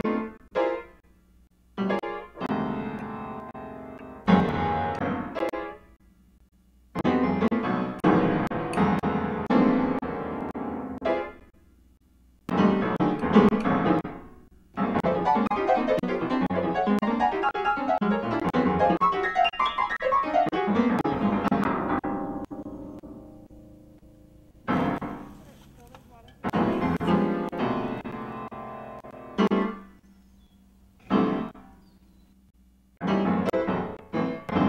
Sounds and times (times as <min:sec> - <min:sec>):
Music: 0:01.8 - 0:05.9, 0:07.0 - 0:11.5, 0:12.5 - 0:25.6, 0:26.2 - 0:30.0, 0:33.0 - 0:34.6
Speech: 0:25.3 - 0:27.1.